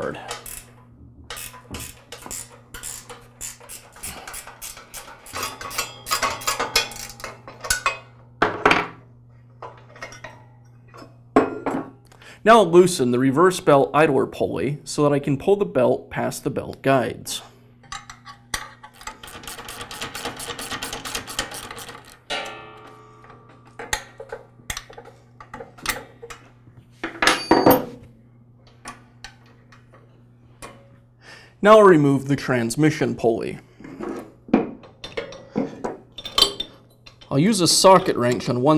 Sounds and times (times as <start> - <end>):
Speech: 12.4 - 17.5, 31.6 - 33.6, 37.3 - 38.7.